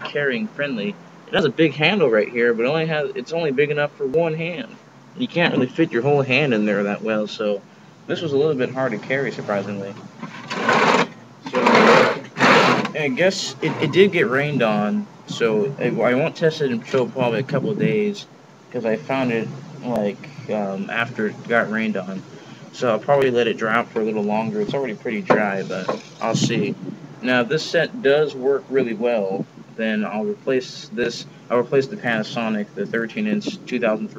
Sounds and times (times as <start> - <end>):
Speech: 0.0 - 10.0, 11.4 - 12.2, 12.9 - 34.1.